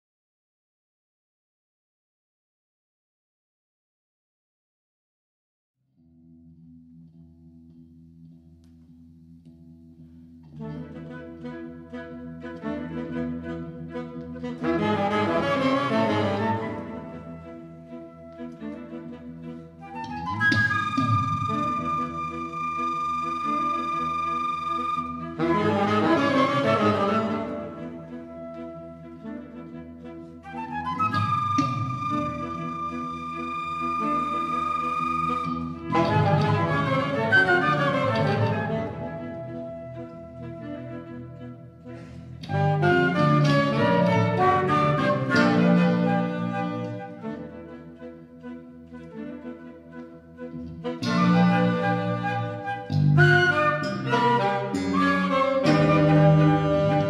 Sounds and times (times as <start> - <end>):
Flute: 10.6 - 57.1.